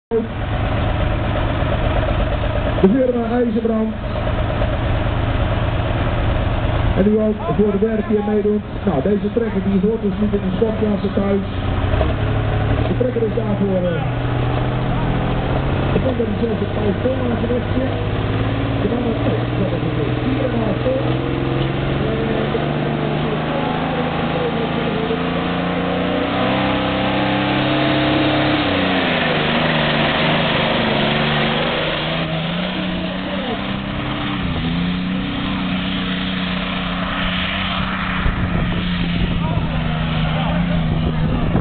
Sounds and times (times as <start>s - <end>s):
Vehicle: 0.1s - 41.6s
Speech: 2.8s - 4.0s, 7.0s - 11.5s, 12.9s - 14.2s, 15.9s - 18.2s, 18.8s - 21.2s, 22.0s - 25.4s, 32.6s - 33.7s, 39.3s - 41.6s.